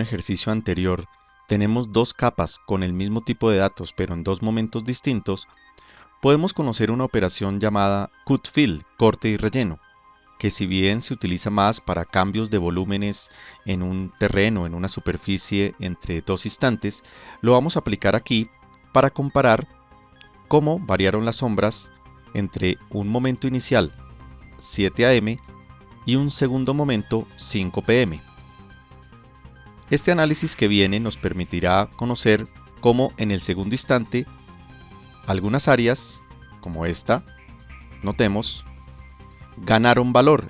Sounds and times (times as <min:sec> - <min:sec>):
Speech: 0:00.0 - 0:05.5, 0:06.2 - 0:09.8, 0:10.4 - 0:19.6, 0:20.5 - 0:23.9, 0:24.6 - 0:25.4, 0:26.1 - 0:28.2, 0:29.9 - 0:34.3, 0:35.3 - 0:37.2, 0:38.0 - 0:38.6, 0:39.6 - 0:40.4
Music: 0:00.0 - 0:40.4.